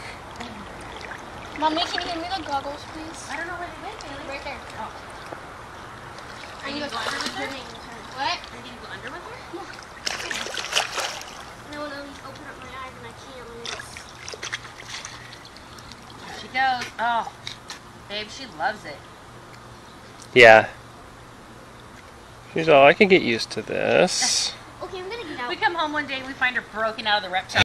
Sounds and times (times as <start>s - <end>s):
Speech: 20.4s - 20.7s, 22.6s - 24.5s.